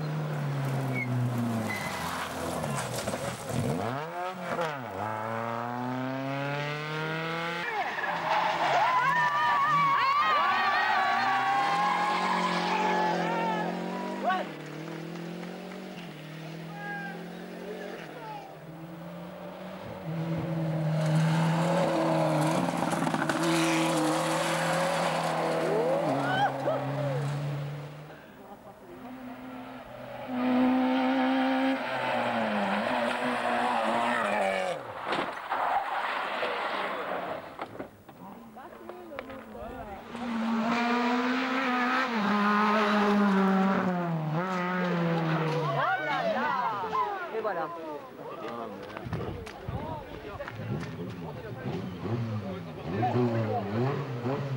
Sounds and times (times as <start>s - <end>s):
Race car, auto racing: 0.0s - 54.5s
Skidding: 0.0s - 54.5s.